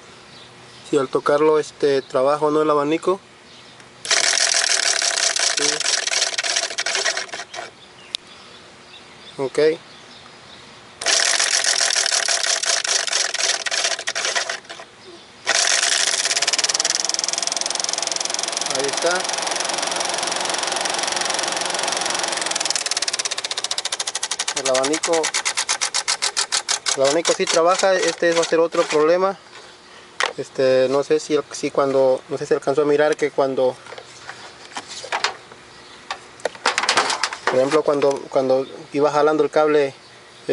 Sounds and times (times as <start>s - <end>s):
Motor vehicle (road): 0.0s - 5.8s, 7.2s - 13.2s, 28.9s - 40.5s
Speech: 0.9s - 3.2s, 9.4s - 9.8s, 18.7s - 19.3s, 24.6s - 25.3s, 30.4s - 33.8s, 37.5s - 40.5s
Engine: 4.0s - 7.8s, 11.0s - 29.2s.